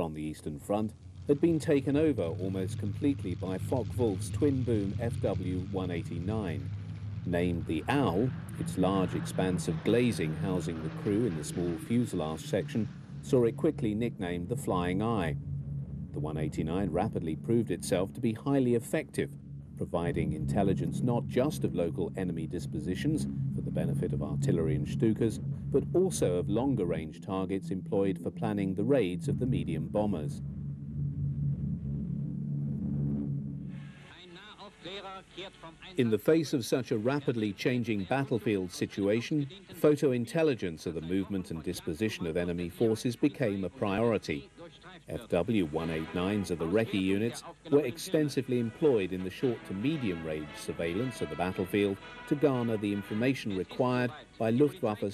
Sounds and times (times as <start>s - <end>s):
Speech: 0.0s - 6.6s, 7.3s - 15.4s, 16.2s - 30.4s, 34.1s - 55.1s.